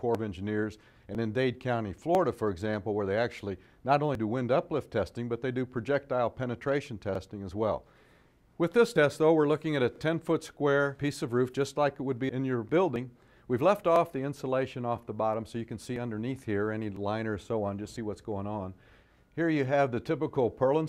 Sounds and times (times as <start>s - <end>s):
Speech: 0.0s - 7.8s, 8.6s - 18.8s, 19.4s - 20.8s.